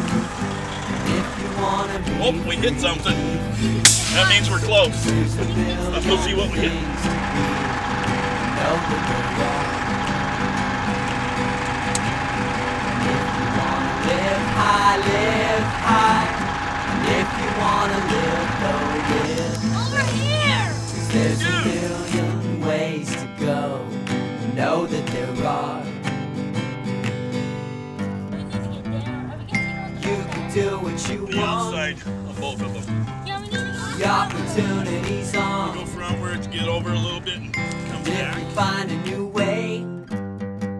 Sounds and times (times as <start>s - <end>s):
Music: 0.0s - 40.7s
Speech: 4.1s - 6.8s, 28.4s - 30.0s, 31.2s - 35.0s, 35.8s - 38.4s.